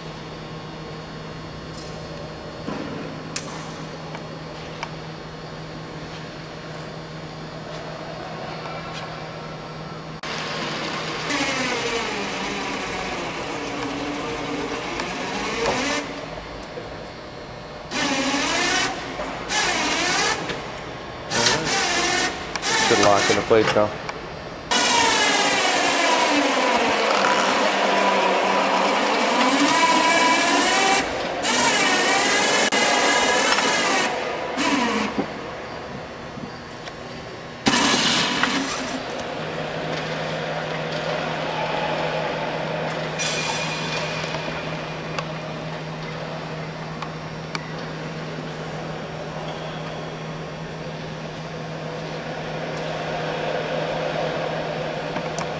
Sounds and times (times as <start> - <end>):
Speech: 21.3 - 21.8, 22.9 - 24.0.